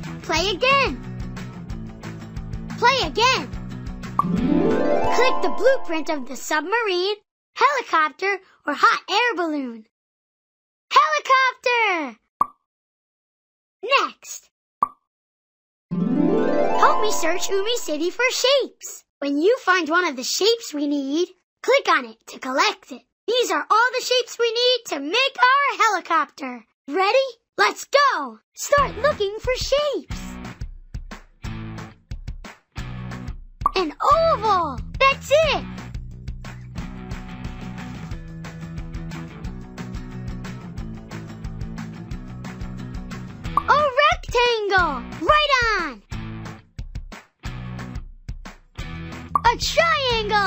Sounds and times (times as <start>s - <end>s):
Music: 0.0s - 6.9s, 15.9s - 18.5s, 28.8s - 50.4s
Speech: 0.2s - 1.0s, 2.8s - 3.5s, 4.8s - 9.9s, 10.9s - 12.2s, 13.8s - 14.5s, 16.5s - 30.4s, 33.8s - 35.7s, 43.6s - 46.0s, 49.4s - 50.4s.